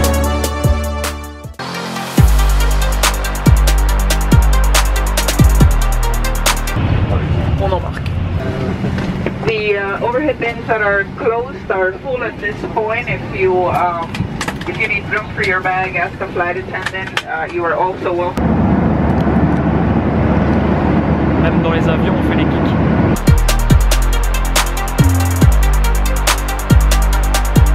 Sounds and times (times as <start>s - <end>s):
Speech: 7.0s - 8.8s, 9.4s - 18.4s, 21.4s - 22.8s.